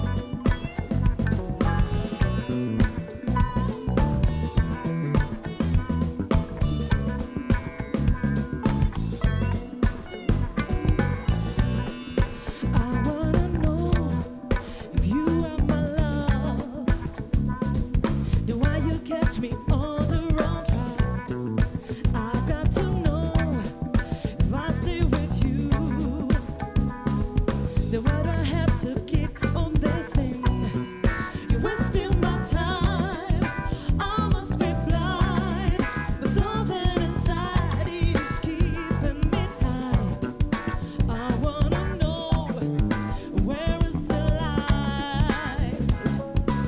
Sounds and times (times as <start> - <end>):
Music: 0.0 - 46.6.